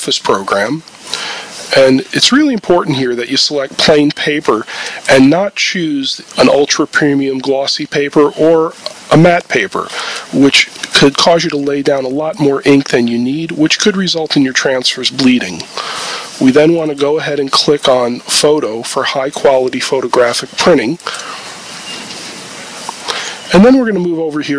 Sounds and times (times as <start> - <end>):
Speech: 0.0 - 0.9, 1.7 - 15.7, 16.4 - 21.1, 23.5 - 24.5.